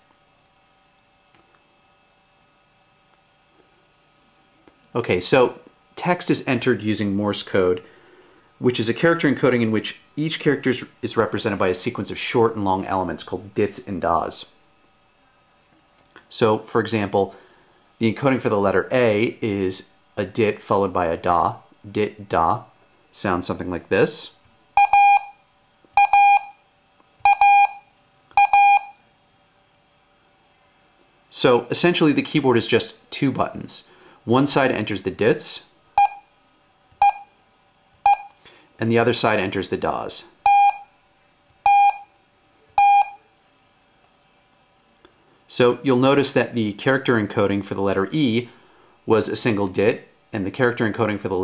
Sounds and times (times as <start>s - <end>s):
Speech: 4.9s - 7.9s, 8.6s - 14.6s, 16.3s - 17.4s, 18.0s - 24.4s, 31.3s - 35.7s, 38.8s - 40.4s, 45.5s - 51.4s.